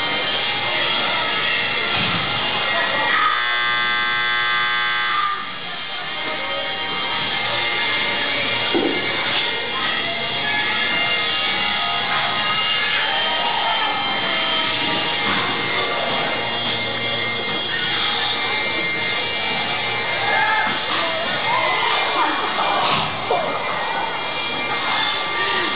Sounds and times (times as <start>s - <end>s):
Music: 0.0s - 25.7s
Speech: 2.4s - 3.6s, 5.6s - 14.6s, 15.4s - 25.7s.